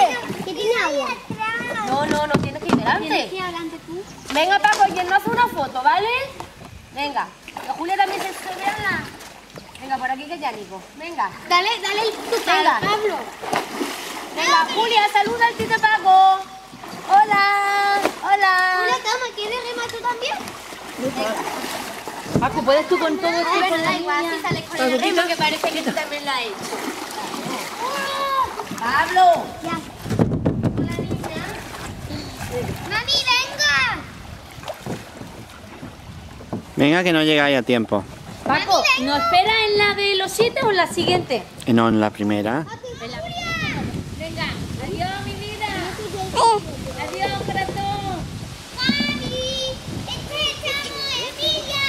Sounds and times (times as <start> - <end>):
Rowboat, canoe, kayak: 0.0 - 51.8.